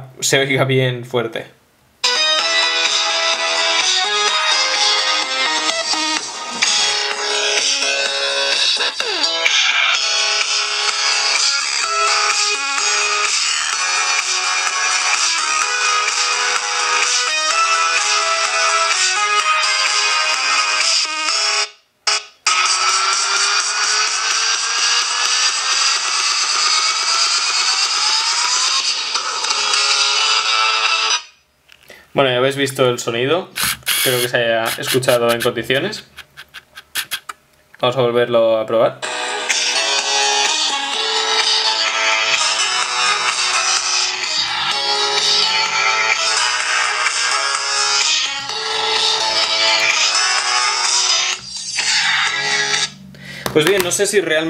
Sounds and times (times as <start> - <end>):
Inside, small room: 0.0 - 54.4
Music: 2.0 - 31.4, 39.0 - 54.4.